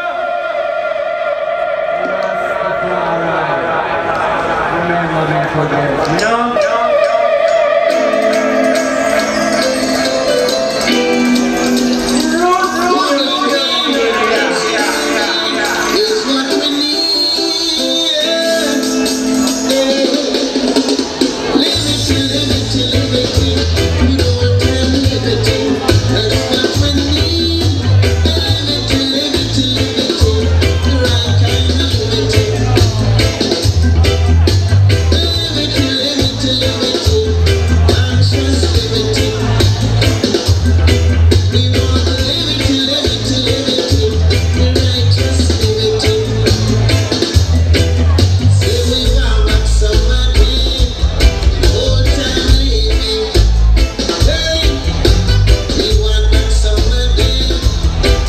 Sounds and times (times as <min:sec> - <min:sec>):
Speech: 0:02.0 - 0:07.2, 0:12.2 - 0:16.7, 0:24.0 - 0:40.6
Music: 0:06.2 - 0:58.2.